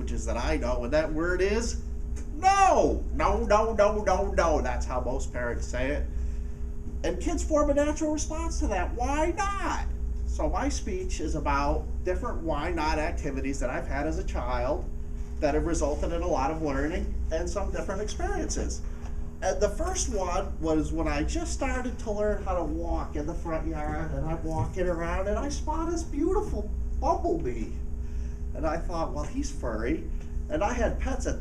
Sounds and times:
Male speech, man speaking: 0.0s - 6.1s, 7.0s - 18.8s, 19.4s - 27.8s, 28.5s - 31.4s.

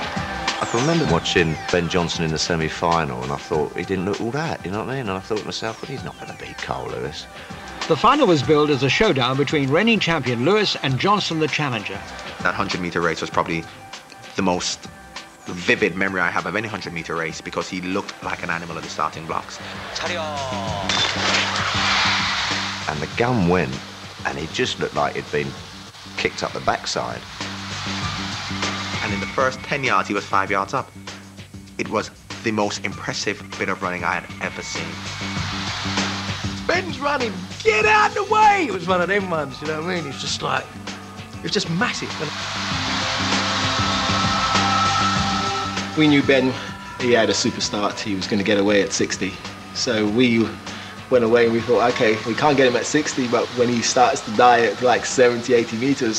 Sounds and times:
Music: 0.0s - 56.1s
Male speech, man speaking: 0.6s - 14.9s, 15.5s - 21.1s, 22.9s - 25.6s, 26.2s - 27.3s, 29.0s - 30.9s, 31.8s - 35.0s, 36.7s - 40.7s, 41.4s - 42.4s, 46.0s - 56.1s.

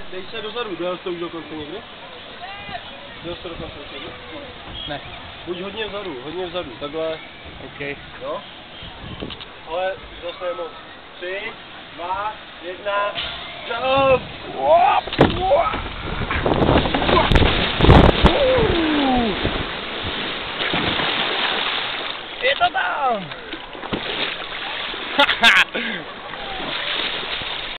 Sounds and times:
Water: 0.0s - 27.7s.

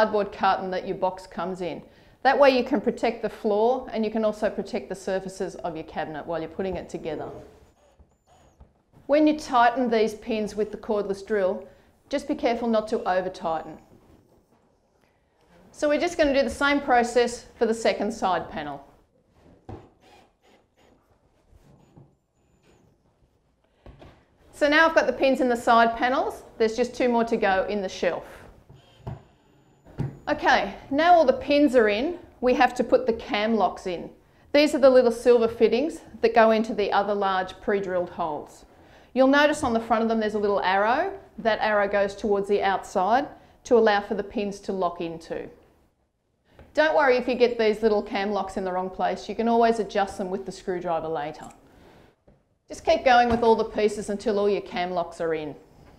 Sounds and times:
Speech: 0.0s - 7.5s, 9.1s - 13.8s, 15.8s - 18.9s, 24.6s - 28.4s, 30.3s - 45.6s, 46.8s - 51.6s, 52.7s - 55.6s.

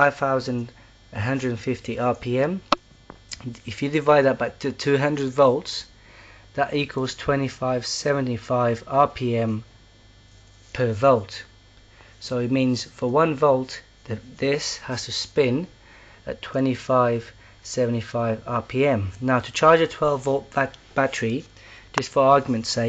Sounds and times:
Speech: 0.0s - 2.7s, 3.3s - 5.9s, 6.6s - 9.7s, 10.7s - 11.6s, 12.2s - 22.8s.

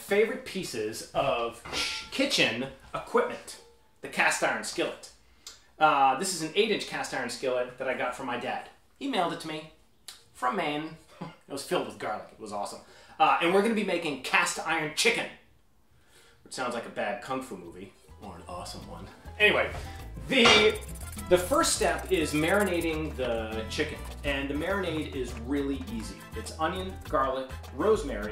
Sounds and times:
Speech: 0.0s - 5.2s, 5.8s - 9.8s, 10.4s - 15.4s, 16.5s - 19.7s, 20.3s - 28.3s.

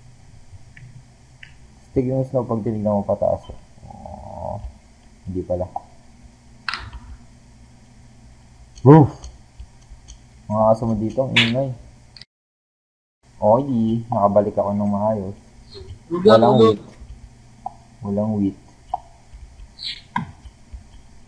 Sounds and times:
Speech: 2.0s - 4.7s, 5.3s - 5.8s, 8.8s - 9.2s, 10.5s - 11.8s, 13.4s - 17.0s, 18.0s - 18.6s.

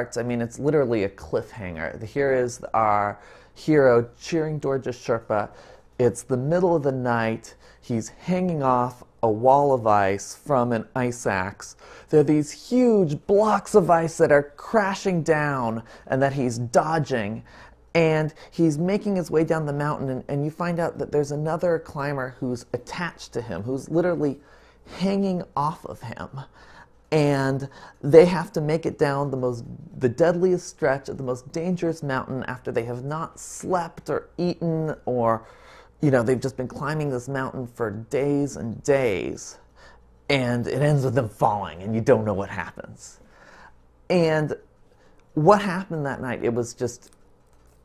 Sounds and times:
Speech: 0.0s - 43.3s, 44.1s - 44.7s, 45.3s - 47.2s.

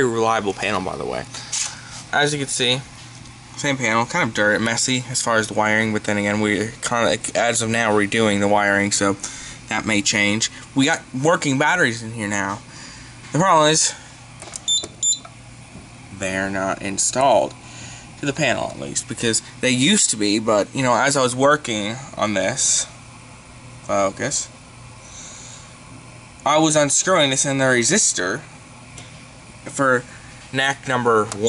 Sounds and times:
Speech: 0.0s - 1.3s, 2.1s - 2.9s, 3.6s - 12.6s, 13.3s - 14.0s, 16.1s - 17.6s, 18.2s - 23.0s, 23.9s - 24.6s, 26.4s - 28.5s, 29.7s - 31.4s
Beep, bleep: 14.7s - 15.3s.

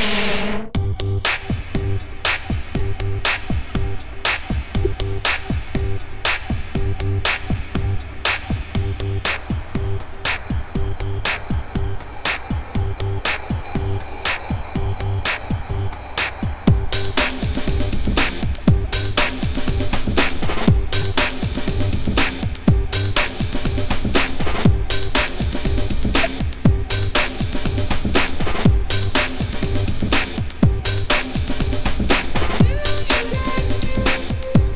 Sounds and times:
Music: 0.0s - 34.7s.

